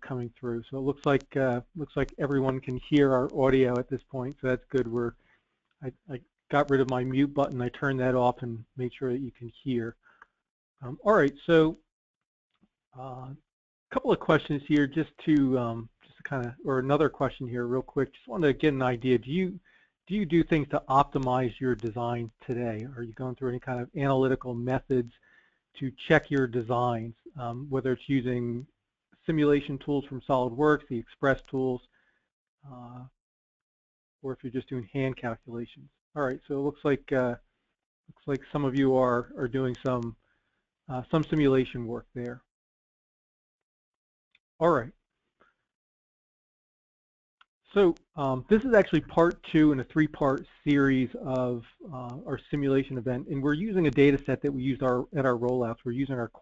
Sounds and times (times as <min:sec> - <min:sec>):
Speech: 0:00.0 - 0:05.2, 0:05.8 - 0:10.0, 0:10.8 - 0:11.9, 0:13.0 - 0:25.2, 0:25.8 - 0:31.9, 0:32.7 - 0:33.2, 0:34.2 - 0:37.4, 0:38.1 - 0:40.2, 0:40.9 - 0:42.5, 0:44.6 - 0:45.0, 0:47.7 - 0:56.4.